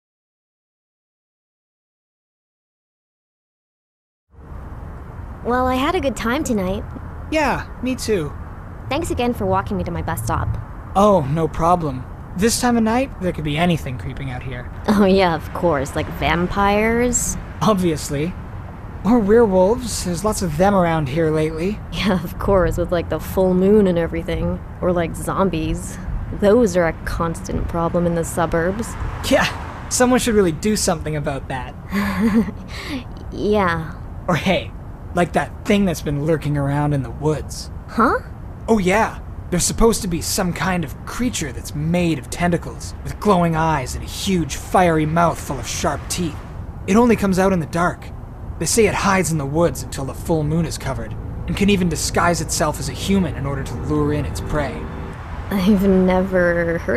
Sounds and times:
Speech: 5.5 - 6.8, 7.4 - 8.3, 8.9 - 18.4, 19.1 - 31.7, 32.8 - 54.8, 55.5 - 56.9.

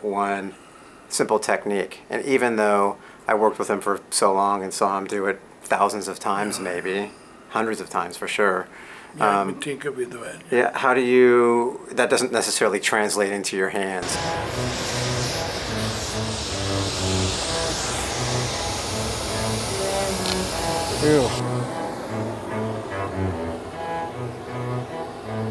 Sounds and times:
Speech: 0.0 - 14.0, 21.0 - 21.4
Music: 14.0 - 25.5.

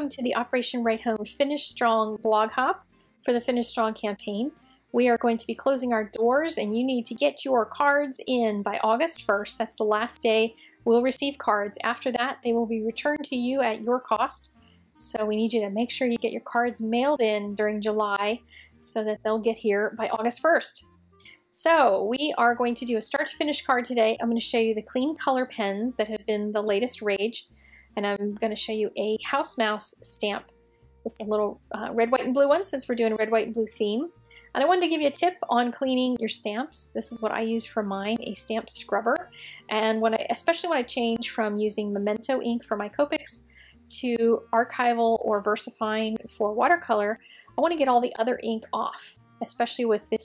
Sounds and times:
Speech: 0.0 - 20.8, 21.6 - 27.4, 28.0 - 30.5, 31.1 - 50.2.

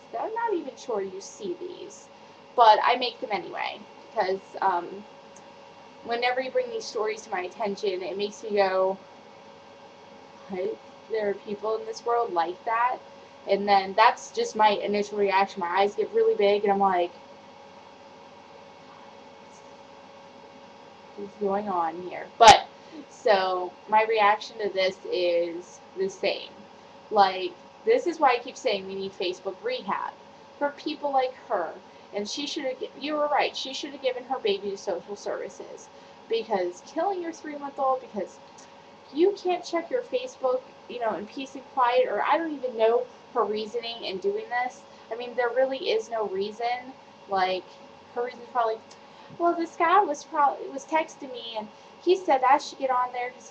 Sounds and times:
Speech: 0.0 - 2.0, 2.6 - 5.0, 6.1 - 9.0, 10.5 - 17.1, 21.2 - 26.6, 27.2 - 38.3, 39.1 - 53.5.

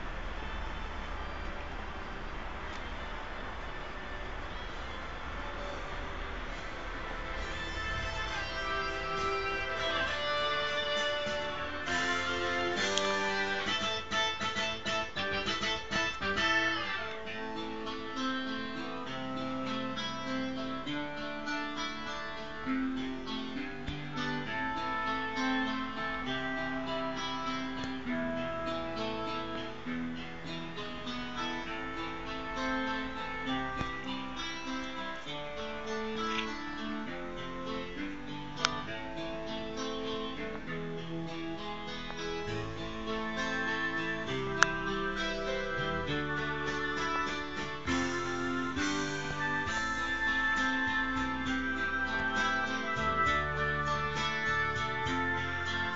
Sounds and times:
Music: 3.7 - 55.9.

